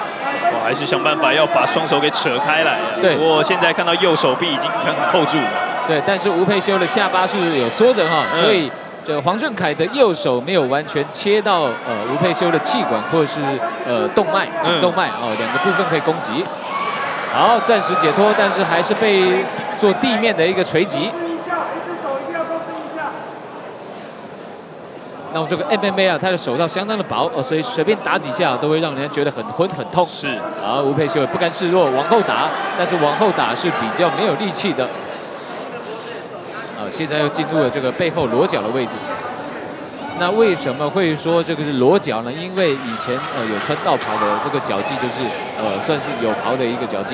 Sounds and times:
Inside, large room or hall: 0:00.0 - 0:47.1.

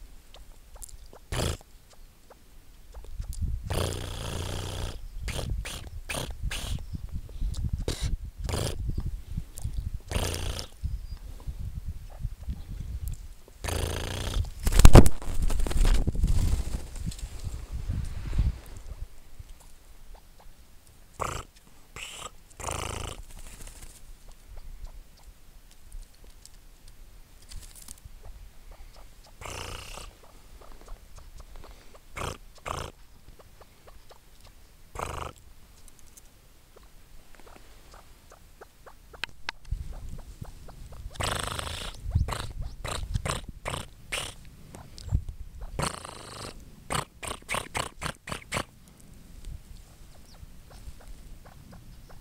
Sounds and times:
Bird: 0:04.5 - 0:08.1, 0:21.2 - 0:22.4, 0:28.2 - 0:48.6, 0:49.7 - 0:52.2.

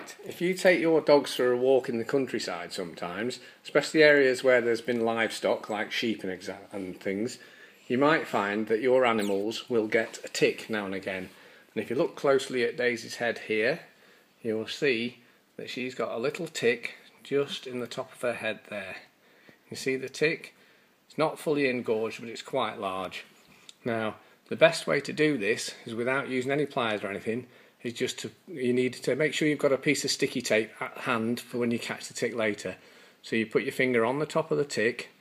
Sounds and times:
Speech: 0:00.0 - 0:35.2.

